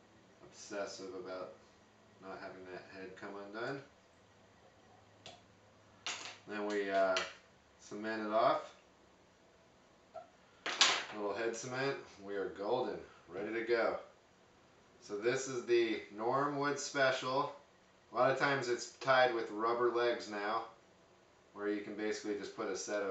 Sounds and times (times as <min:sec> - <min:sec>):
Inside, small room: 0:00.0 - 0:23.1
Speech: 0:00.4 - 0:01.6, 0:02.2 - 0:03.9, 0:06.5 - 0:08.8, 0:11.1 - 0:14.1, 0:15.0 - 0:17.6, 0:18.2 - 0:20.8, 0:21.6 - 0:23.1.